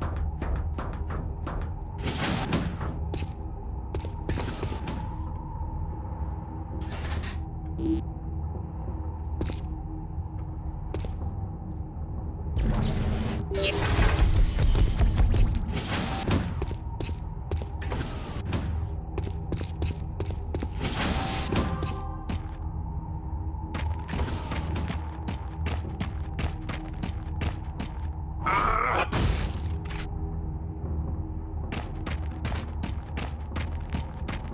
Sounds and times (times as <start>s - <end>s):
Sound effect: 0.8s - 3.3s, 12.6s - 17.1s, 20.6s - 22.6s.